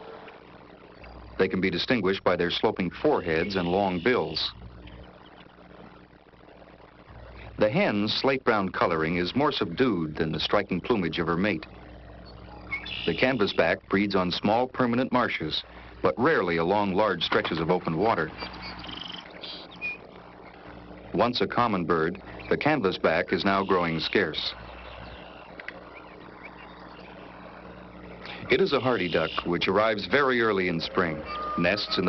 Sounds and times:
Speech: 1.4s - 4.6s, 7.6s - 11.7s, 13.1s - 18.4s, 21.1s - 24.6s, 28.4s - 32.0s.

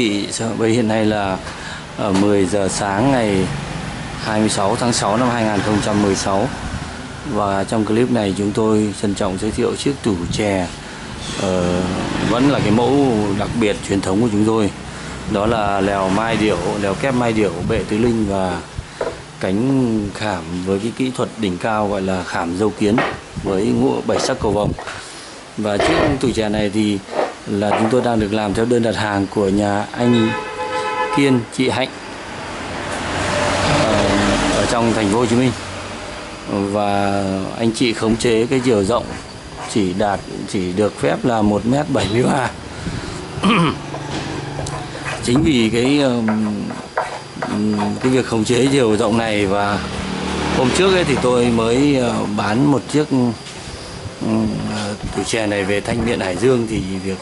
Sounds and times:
Speech: 0.0s - 3.6s, 4.2s - 6.6s, 7.3s - 18.7s, 19.4s - 25.0s, 25.6s - 30.4s, 31.1s - 32.0s, 33.7s - 35.6s, 36.5s - 42.6s, 45.2s - 49.9s, 50.5s - 53.4s, 54.2s - 57.2s.

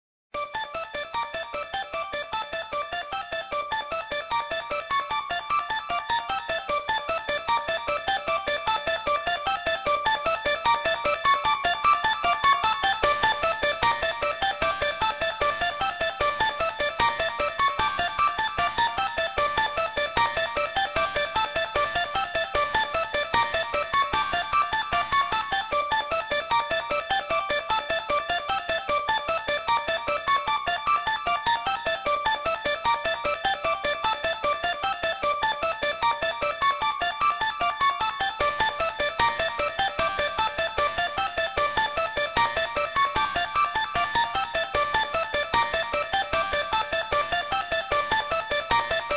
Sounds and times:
Music: 0.4s - 49.1s.

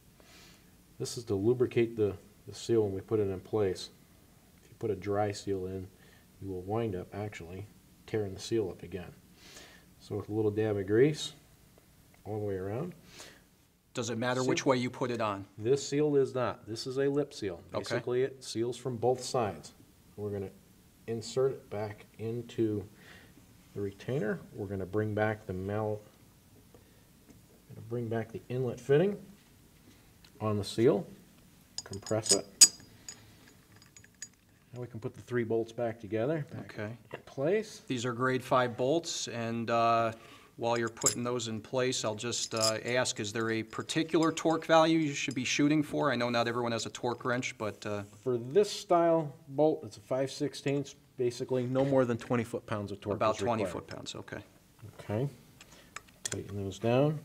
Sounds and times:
Inside, small room: 0.0s - 57.2s
Speech: 1.0s - 4.0s, 4.7s - 9.2s, 10.0s - 11.4s, 12.2s - 13.0s, 14.0s - 22.9s, 23.7s - 26.1s, 27.7s - 29.3s, 30.4s - 31.2s, 31.8s - 32.5s, 34.7s - 55.4s, 56.3s - 57.2s.

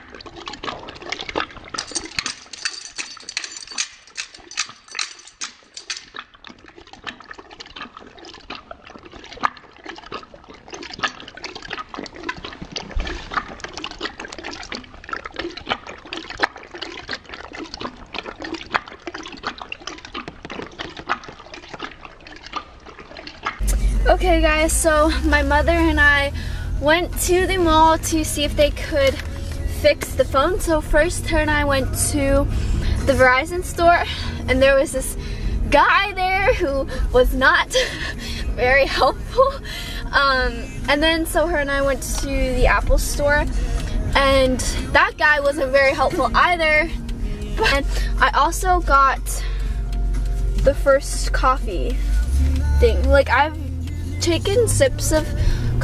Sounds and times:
Speech: 23.6s - 29.2s, 29.8s - 32.5s, 33.1s - 37.8s, 38.6s - 43.5s, 44.2s - 46.9s, 47.6s - 49.4s, 50.7s - 52.0s, 52.8s - 53.6s, 54.2s - 55.3s
Music: 23.6s - 36.0s, 39.8s - 45.0s, 45.6s - 55.8s.

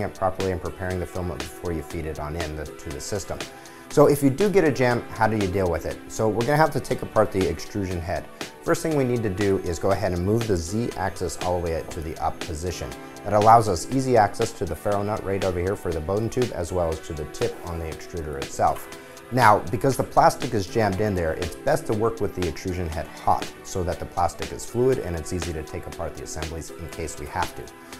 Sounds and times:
Speech: 0.0s - 27.7s
Music: 0.0s - 27.9s.

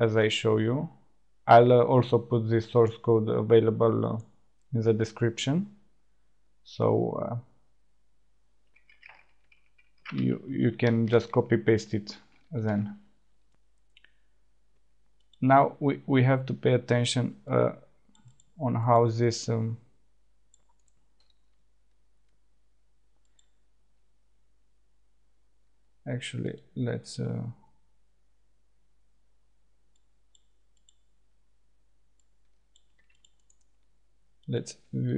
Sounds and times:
Speech: 0.0s - 5.7s, 6.7s - 7.4s, 10.1s - 13.0s, 15.4s - 17.8s, 18.6s - 19.8s, 26.1s - 27.6s, 34.5s - 35.1s.

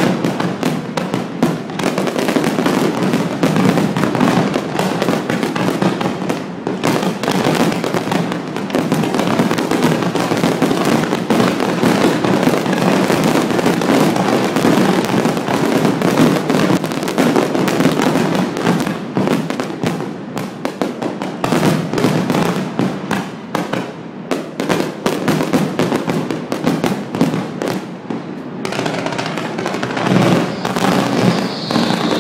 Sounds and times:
Fireworks: 0.0s - 32.2s.

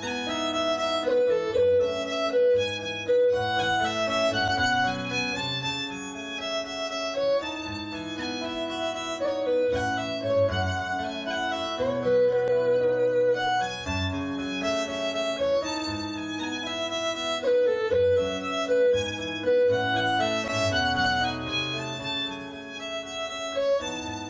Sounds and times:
Folk music: 0.0s - 24.3s.

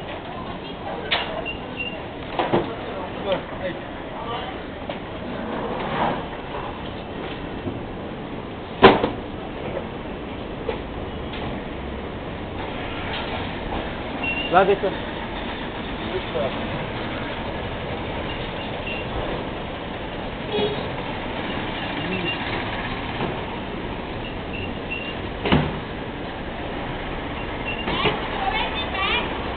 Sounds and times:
Truck: 0.0s - 29.5s.

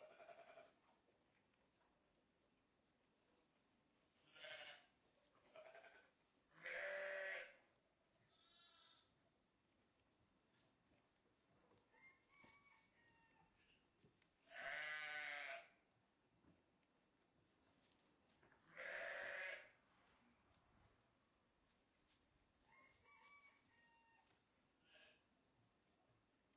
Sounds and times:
Livestock, farm animals, working animals: 0.0s - 26.5s.

